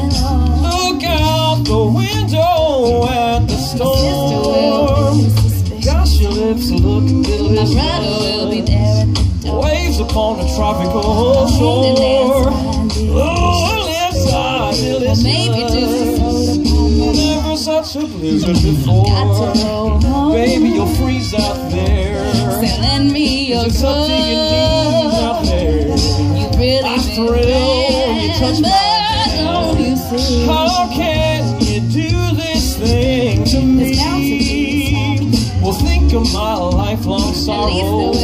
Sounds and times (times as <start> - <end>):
Singing: 0.0 - 38.2.